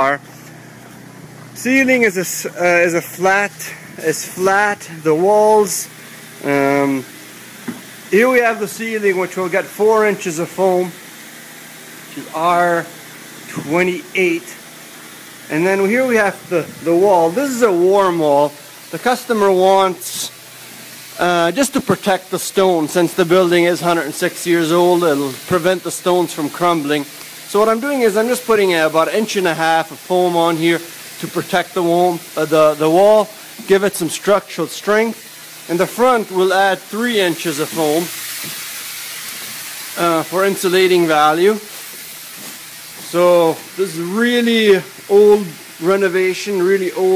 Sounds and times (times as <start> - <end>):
Speech: 0.0 - 0.3, 1.6 - 7.1, 8.1 - 11.0, 12.1 - 12.9, 13.5 - 14.6, 15.5 - 20.4, 21.2 - 38.1, 40.0 - 41.7, 43.0 - 47.1
Spray: 0.0 - 47.1.